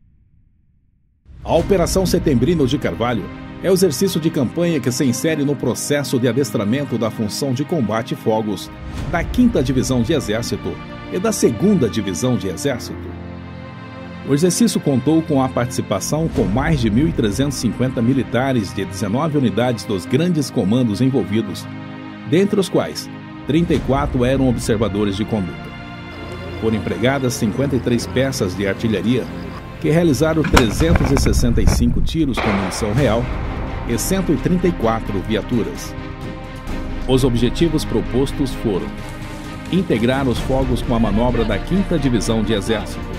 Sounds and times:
Music: 0:01.2 - 0:43.1
Speech: 0:01.5 - 0:13.1, 0:14.2 - 0:21.7, 0:22.3 - 0:25.7, 0:26.3 - 0:35.9, 0:37.1 - 0:39.0, 0:39.7 - 0:43.0.

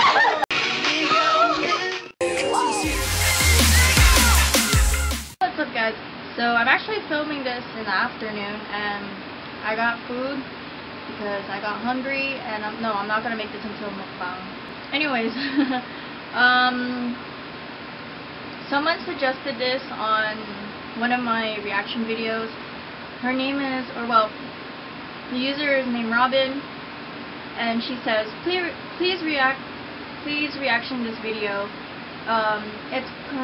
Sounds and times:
Speech: 0:05.4 - 0:10.5, 0:11.2 - 0:15.6, 0:16.4 - 0:17.2, 0:18.6 - 0:22.6, 0:23.2 - 0:24.4, 0:25.3 - 0:26.7, 0:27.6 - 0:29.6, 0:30.2 - 0:31.7, 0:32.3 - 0:33.4.

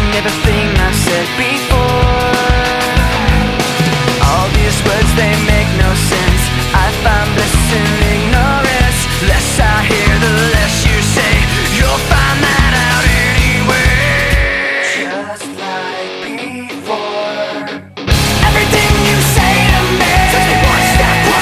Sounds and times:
Music: 0:00.0 - 0:21.4.

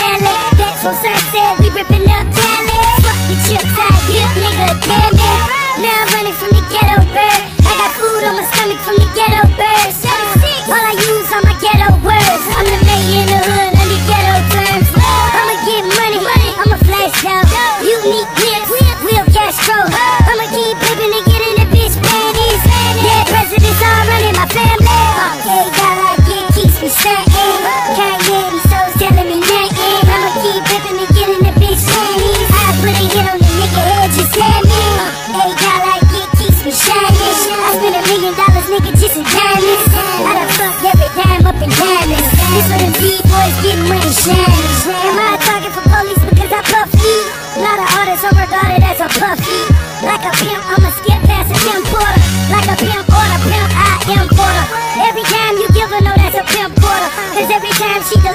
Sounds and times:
Music: 0:00.0 - 0:58.3.

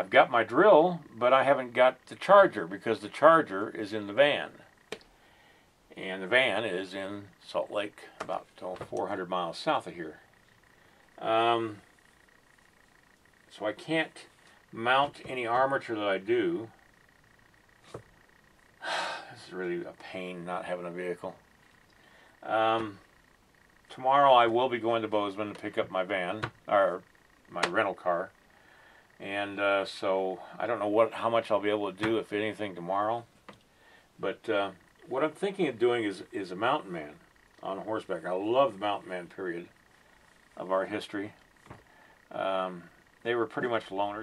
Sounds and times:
Speech: 0:00.0 - 0:04.7, 0:05.9 - 0:10.2, 0:11.2 - 0:11.8, 0:13.5 - 0:16.7, 0:19.2 - 0:21.4, 0:22.4 - 0:23.0, 0:23.9 - 0:28.3, 0:29.2 - 0:33.3, 0:34.2 - 0:39.7, 0:40.6 - 0:41.4, 0:42.3 - 0:44.2
Inside, small room: 0:00.0 - 0:44.2.

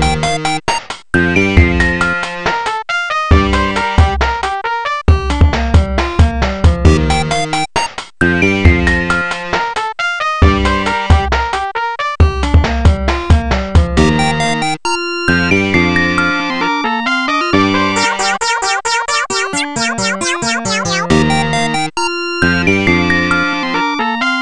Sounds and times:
Dubstep: 0:18.0 - 0:21.2.

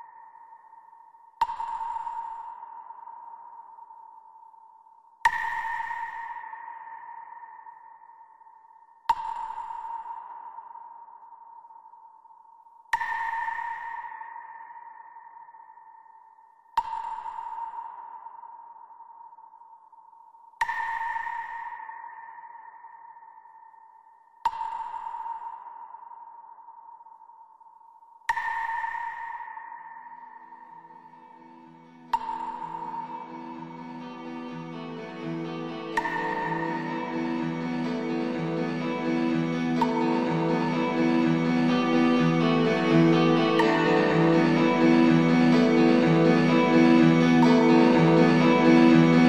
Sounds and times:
Music: 0:00.0 - 0:49.2
Sonar: 0:00.0 - 0:49.2.

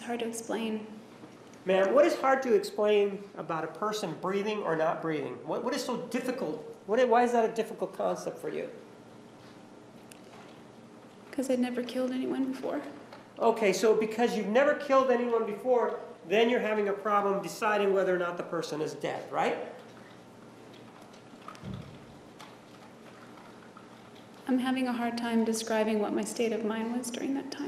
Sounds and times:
Speech: 0:00.0 - 0:01.0, 0:01.7 - 0:08.8, 0:11.4 - 0:19.8, 0:24.5 - 0:27.6.

